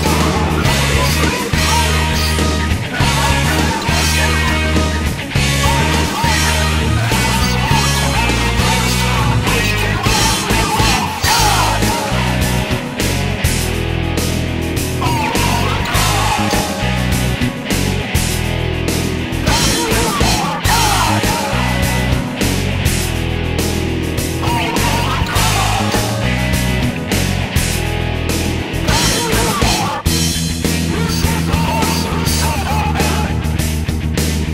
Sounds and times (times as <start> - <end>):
Jazz: 0.0 - 34.5.